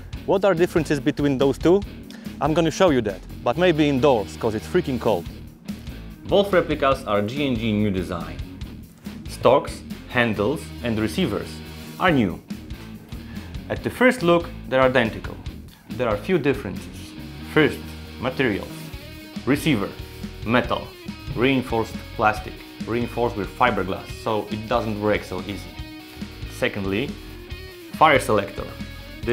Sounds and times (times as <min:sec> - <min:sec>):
Music: 0:00.0 - 0:29.3
Speech: 0:00.3 - 0:05.3, 0:06.2 - 0:08.4, 0:09.3 - 0:12.4, 0:13.7 - 0:18.8, 0:19.5 - 0:25.8, 0:26.5 - 0:27.2, 0:28.0 - 0:29.3.